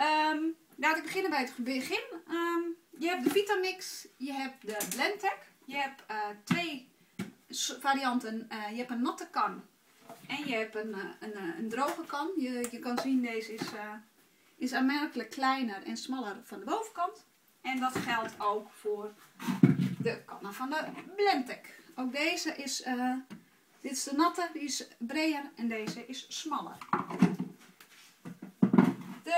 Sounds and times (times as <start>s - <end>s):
Speech: 0.0s - 6.9s, 7.5s - 9.7s, 10.3s - 19.2s, 20.0s - 26.8s.